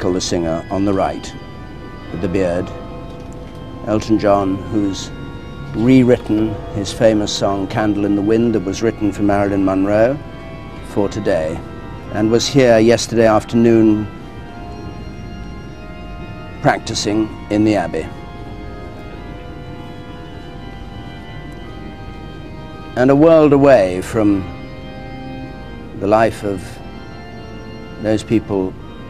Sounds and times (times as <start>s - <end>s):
Speech: 0.0s - 1.3s, 2.2s - 2.7s, 3.9s - 5.1s, 5.8s - 10.2s, 10.9s - 11.6s, 12.2s - 14.1s, 16.7s - 18.1s, 23.0s - 24.5s, 26.0s - 26.7s, 28.0s - 28.7s
Music: 0.0s - 29.1s.